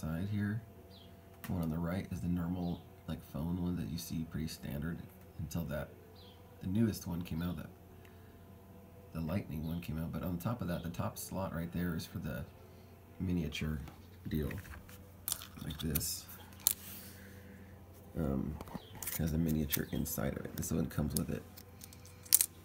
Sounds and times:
Speech: 0:00.0 - 0:00.6, 0:01.5 - 0:05.9, 0:06.6 - 0:07.7, 0:09.2 - 0:12.5, 0:13.2 - 0:14.7, 0:15.6 - 0:16.3, 0:18.2 - 0:21.4.

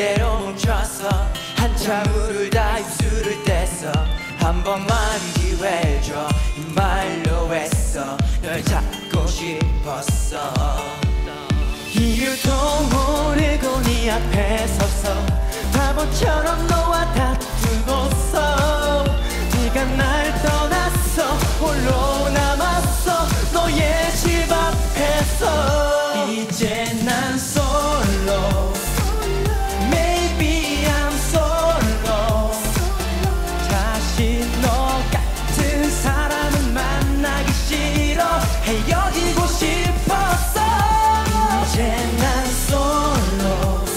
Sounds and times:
Dance music: 0:00.0 - 0:43.9.

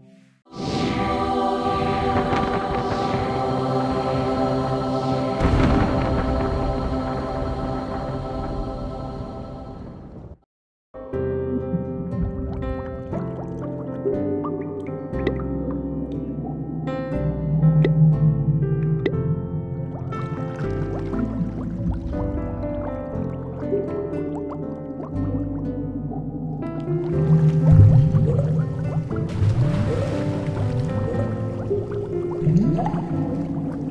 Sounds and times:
Music: 0:00.0 - 0:10.4, 0:11.0 - 0:33.9.

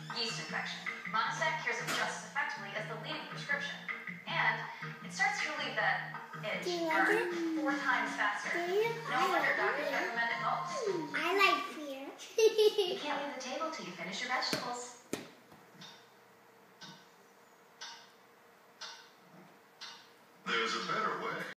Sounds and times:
Speech: 0:00.1 - 0:12.1, 0:20.5 - 0:21.5.

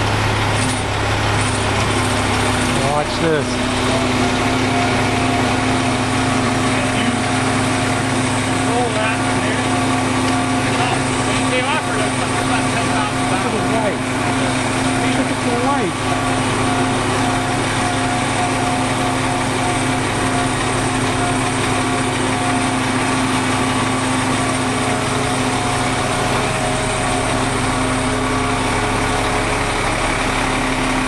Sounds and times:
Idling: 0:00.0 - 0:31.0
Medium engine (mid frequency): 0:00.0 - 0:31.0
Truck: 0:00.0 - 0:31.0
Speech: 0:02.8 - 0:04.4, 0:06.7 - 0:07.4, 0:08.6 - 0:09.8, 0:10.7 - 0:16.1.

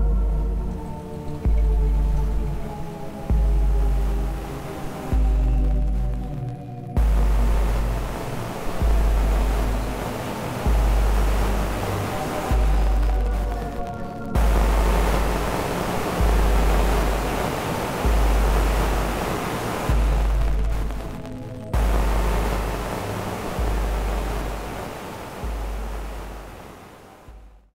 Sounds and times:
Music: 0:00.0 - 0:27.8.

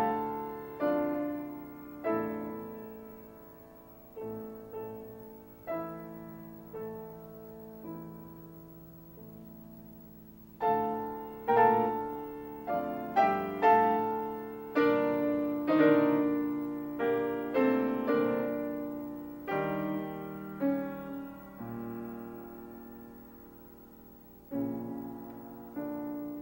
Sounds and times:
Piano: 0:00.0 - 0:26.4.

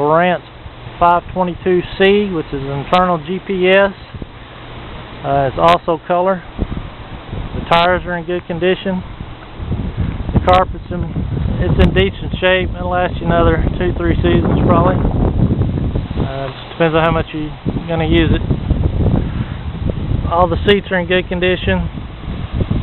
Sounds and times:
Wind noise (microphone): 0:04.0 - 0:05.6, 0:06.4 - 0:22.8.

